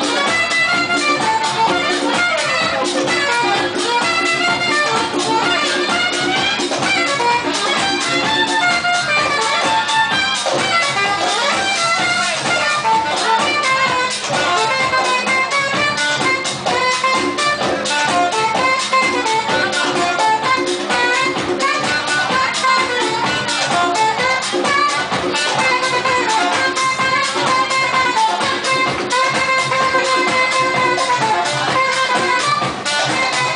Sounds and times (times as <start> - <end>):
House music: 0.0 - 33.5.